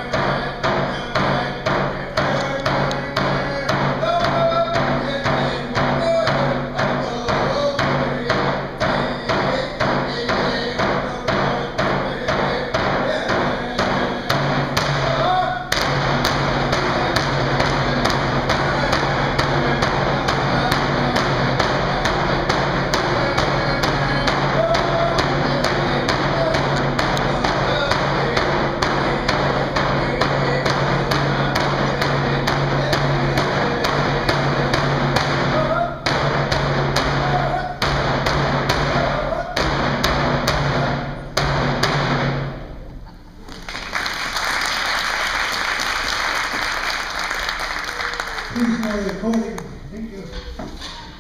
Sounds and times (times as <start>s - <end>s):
Drum: 0.0s - 42.9s.